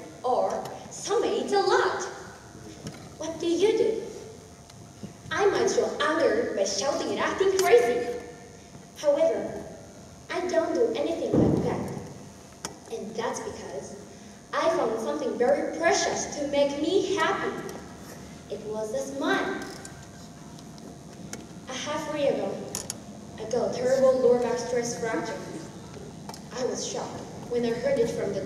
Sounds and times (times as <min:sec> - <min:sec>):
Female speech, woman speaking: 0:00.0 - 0:02.2, 0:03.2 - 0:04.1, 0:05.3 - 0:08.2, 0:09.0 - 0:09.7, 0:10.3 - 0:12.0, 0:12.9 - 0:17.7, 0:18.5 - 0:19.7, 0:21.7 - 0:22.7, 0:23.4 - 0:25.7, 0:26.5 - 0:28.4.